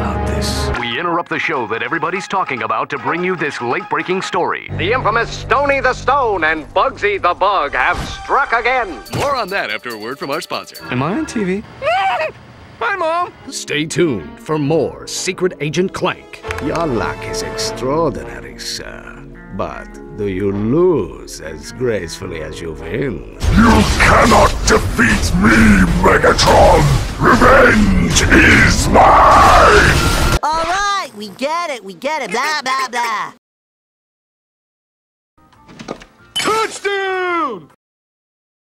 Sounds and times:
Speech: 0.0 - 11.6, 12.8 - 33.4.

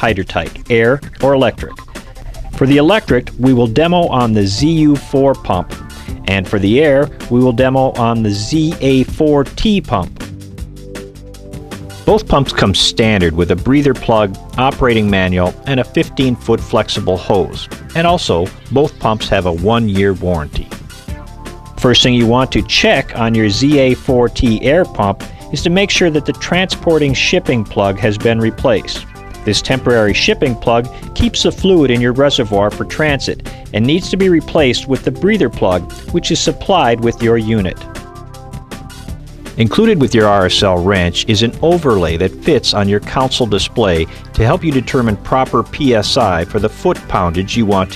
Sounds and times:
Speech: 0.0 - 1.8, 2.6 - 10.2, 12.1 - 20.8, 21.8 - 37.9, 39.6 - 47.9
Music: 0.0 - 47.9.

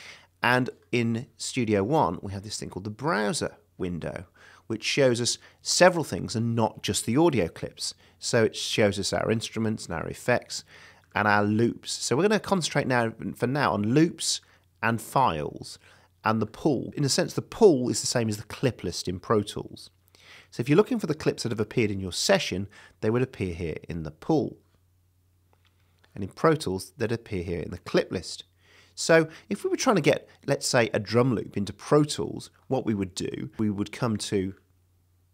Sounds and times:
Speech: 0.0 - 24.7, 26.1 - 34.7.

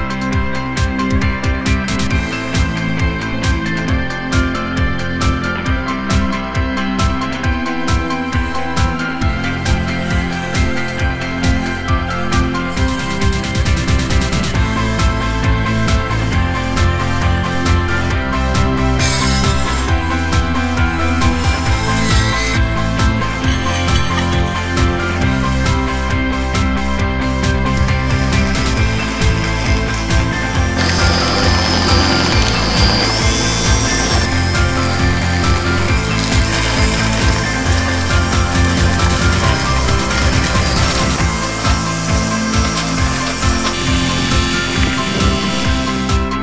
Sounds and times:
Music: 0.0 - 46.4.

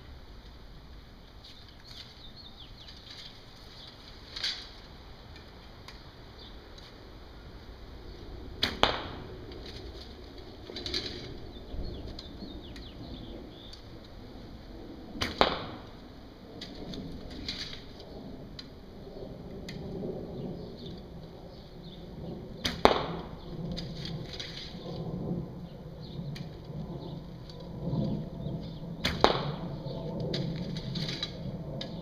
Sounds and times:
Arrow: 8.6 - 9.8, 15.2 - 15.9, 22.6 - 24.9, 29.0 - 29.7, 30.3 - 32.0.

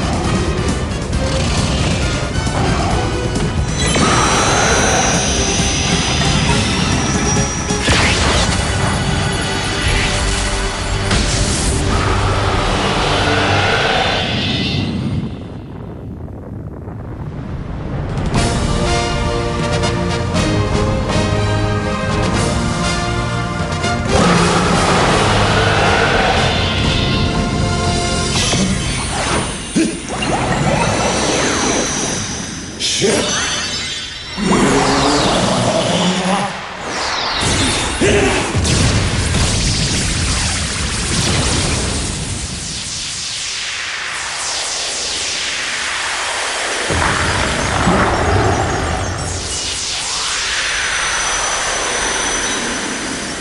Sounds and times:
Music: 0.0 - 16.0, 17.8 - 43.3.

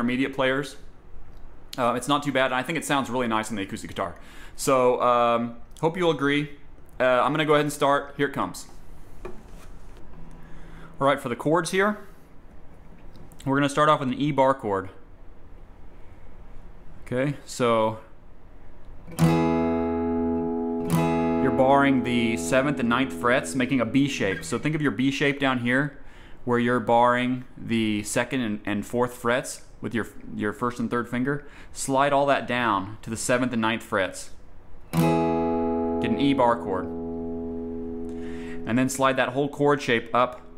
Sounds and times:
Speech: 0.0 - 0.9, 1.8 - 8.8, 11.0 - 12.1, 13.4 - 15.1, 17.0 - 18.2, 21.4 - 34.4, 36.0 - 36.9, 38.6 - 40.5
Acoustic guitar: 9.0 - 11.0, 19.1 - 25.5, 34.9 - 40.5
Strum: 19.1 - 25.6, 34.9 - 40.5.

